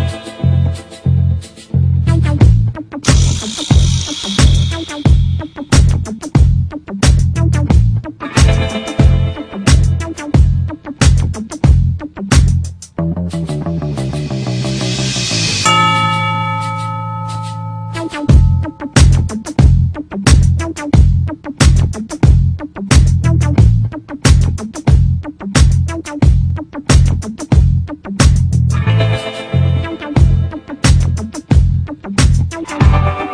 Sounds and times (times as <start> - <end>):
Music: 0.0 - 33.3.